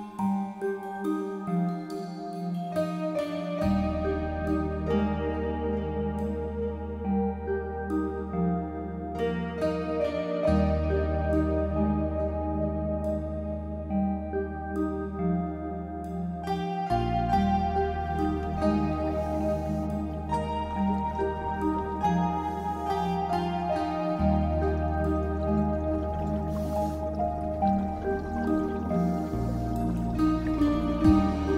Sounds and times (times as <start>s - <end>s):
Music: 0.0s - 31.5s.